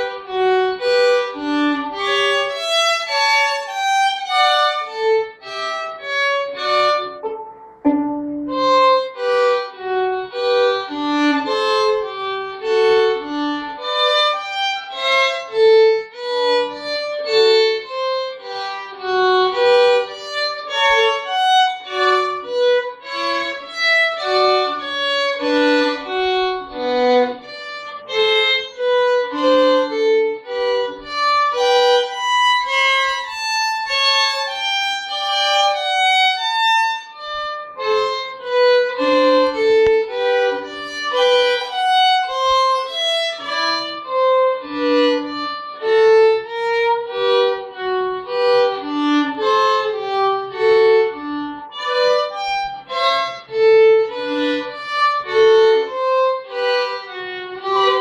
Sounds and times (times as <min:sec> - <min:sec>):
Violin, fiddle: 0:00.0 - 0:58.0.